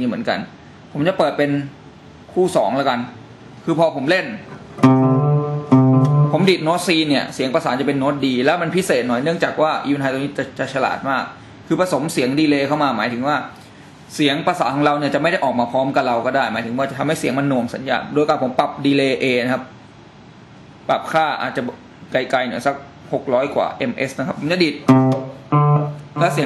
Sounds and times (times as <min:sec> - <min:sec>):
Steel guitar, slide guitar: 0:04.8 - 0:06.4, 0:24.9 - 0:26.4
Effects unit: 0:04.8 - 0:06.6, 0:24.8 - 0:26.4.